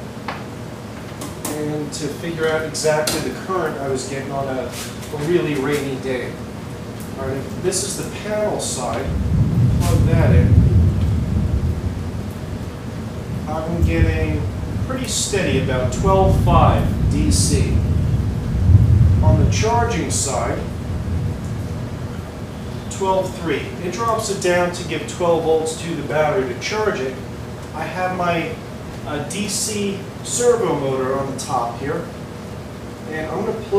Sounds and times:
Speech: 1.5 - 6.4, 7.2 - 9.2, 9.8 - 10.6, 13.5 - 17.9, 19.2 - 20.7, 22.9 - 27.2, 27.8 - 32.2, 33.1 - 33.7.

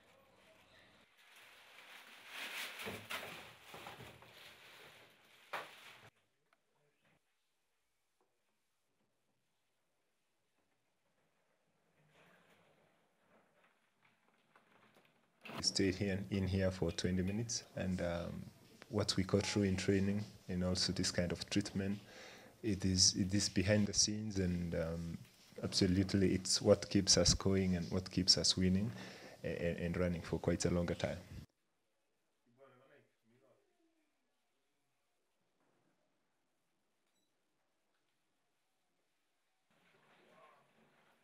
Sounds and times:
Inside, small room: 0.0 - 41.2
Speech: 15.6 - 31.5, 32.5 - 34.2.

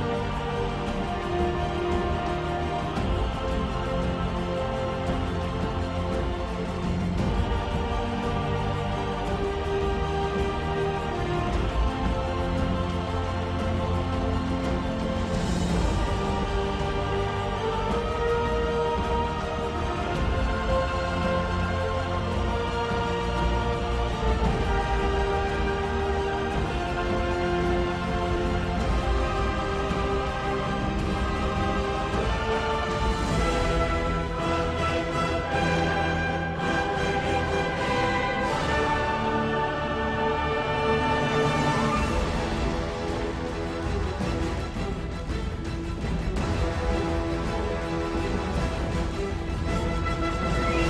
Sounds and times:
Music: 0.0 - 50.8.

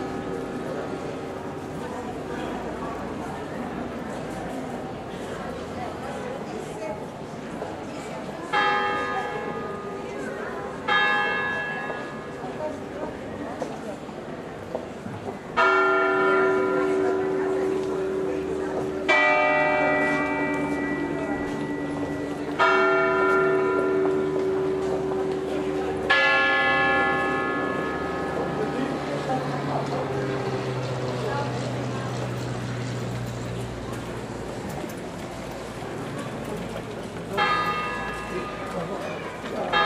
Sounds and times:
Church bell: 0.0 - 3.1, 8.4 - 13.6, 15.5 - 31.5, 37.2 - 39.8.

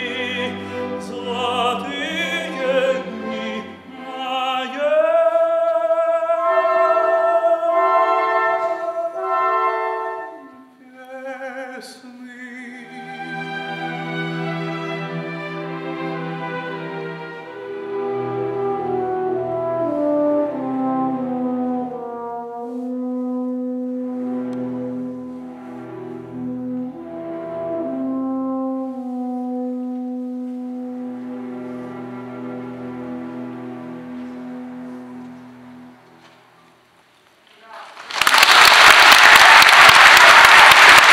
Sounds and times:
Applause: 37.6 - 41.1.

